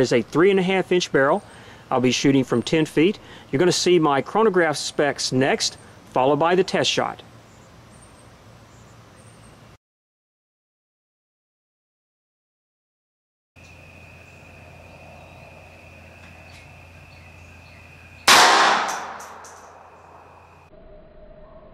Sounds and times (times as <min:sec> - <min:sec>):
Gunshot, gunfire: 0:18.3 - 0:19.4.